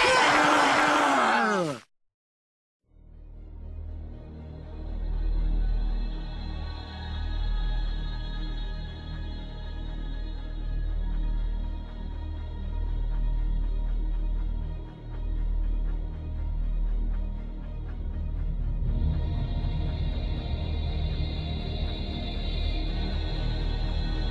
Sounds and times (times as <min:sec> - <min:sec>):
Music: 0:02.8 - 0:24.3.